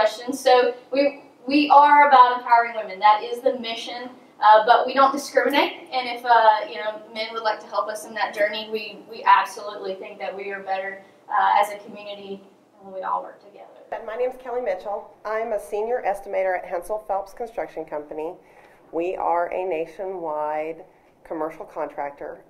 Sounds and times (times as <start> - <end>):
Speech: 0.0 - 18.4, 19.0 - 22.5.